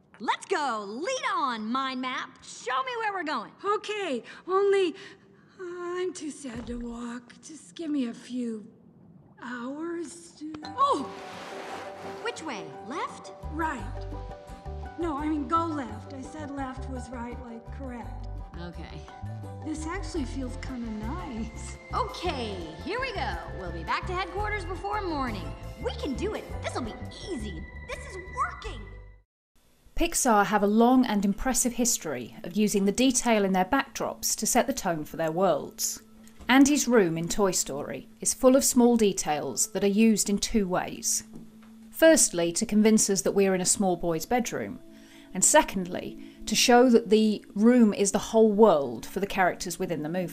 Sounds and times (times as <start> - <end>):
Music: 10.6 - 29.3, 30.6 - 50.3
Speech: 30.0 - 41.2.